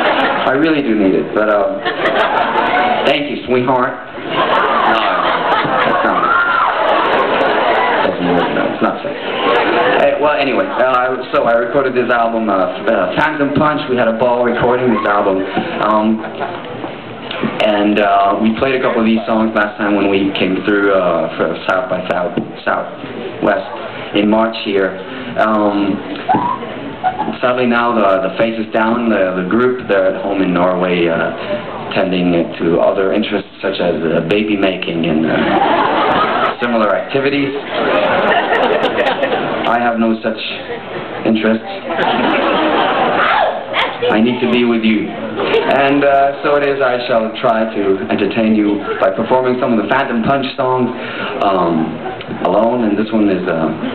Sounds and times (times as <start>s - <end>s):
Inside, large room or hall: 0.0s - 53.9s
Speech: 0.4s - 1.9s, 3.0s - 4.1s, 4.7s - 6.3s, 8.0s - 9.2s, 10.0s - 16.6s, 17.5s - 26.1s, 27.3s - 35.5s, 36.5s - 37.6s, 39.7s - 42.2s, 44.0s - 53.9s.